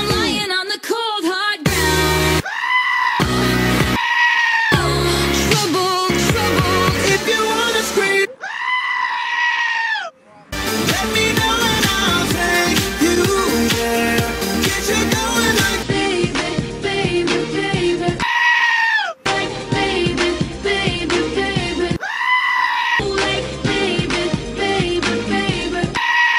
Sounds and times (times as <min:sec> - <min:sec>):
Music: 0:00.0 - 0:00.6, 0:01.6 - 0:02.4, 0:03.2 - 0:04.0, 0:04.8 - 0:08.3, 0:10.6 - 0:18.2, 0:19.3 - 0:22.0, 0:23.0 - 0:26.0
Screaming: 0:02.4 - 0:03.3, 0:04.0 - 0:04.8, 0:08.4 - 0:10.1, 0:18.2 - 0:19.2, 0:22.0 - 0:23.0, 0:26.0 - 0:26.3.